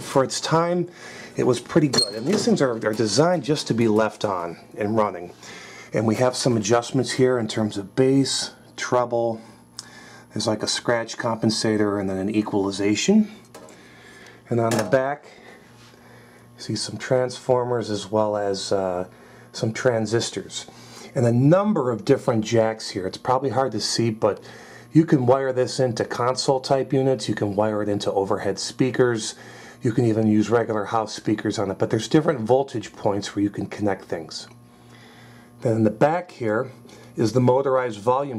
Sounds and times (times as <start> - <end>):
Speech: 0.0 - 9.6, 10.3 - 13.5, 14.5 - 15.4, 16.6 - 34.6, 35.6 - 38.3
Inside, small room: 0.0 - 38.3.